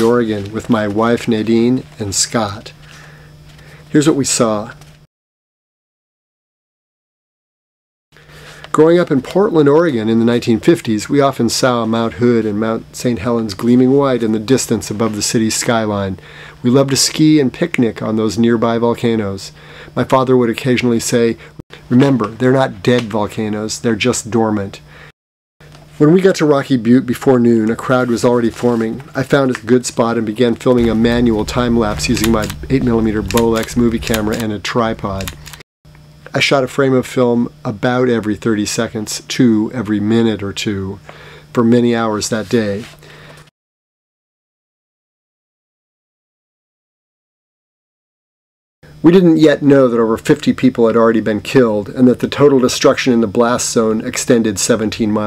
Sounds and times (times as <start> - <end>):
Speech: 0.0 - 2.8, 3.9 - 4.8, 8.7 - 24.8, 26.0 - 35.4, 36.3 - 43.0, 49.0 - 55.2.